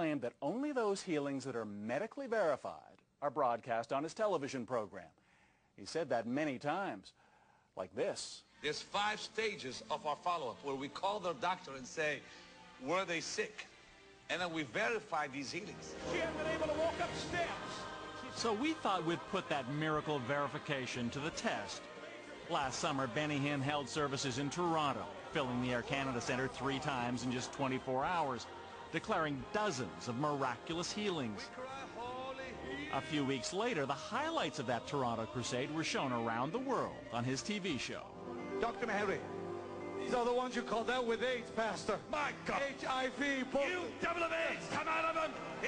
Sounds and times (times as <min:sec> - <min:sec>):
Music: 0:00.0 - 0:02.8, 0:07.3 - 0:45.6
Speech: 0:00.0 - 0:05.2, 0:05.8 - 0:07.2, 0:07.8 - 0:12.2, 0:12.8 - 0:13.7, 0:14.3 - 0:21.8, 0:22.5 - 0:31.5, 0:33.0 - 0:39.3, 0:40.0 - 0:45.6.